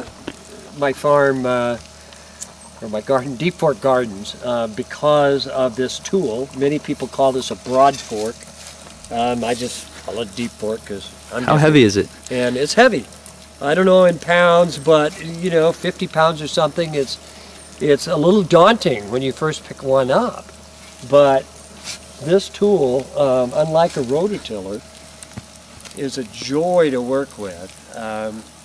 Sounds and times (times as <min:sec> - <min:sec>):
Speech: 0:00.8 - 0:01.8, 0:02.8 - 0:08.4, 0:09.1 - 0:17.2, 0:17.8 - 0:20.4, 0:21.0 - 0:21.5, 0:22.2 - 0:24.8, 0:26.0 - 0:28.5.